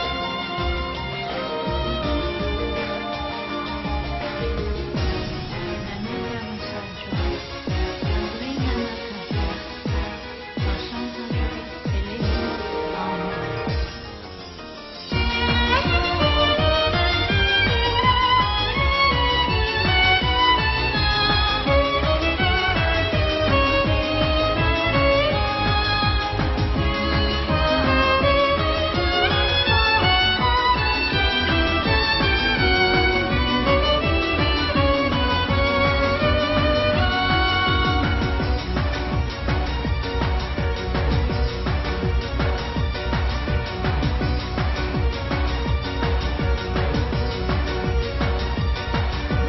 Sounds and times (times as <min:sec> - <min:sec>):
Violin, fiddle: 0:00.0 - 0:13.1, 0:15.1 - 0:49.4.